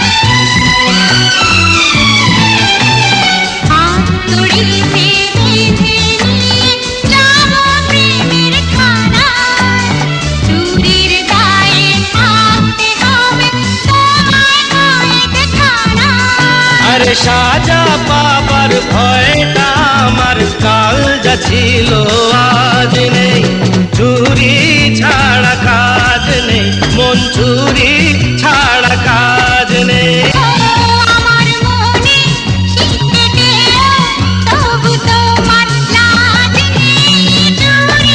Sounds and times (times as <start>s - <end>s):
Music of Bollywood: 0.0s - 38.1s
Singing: 3.7s - 38.1s.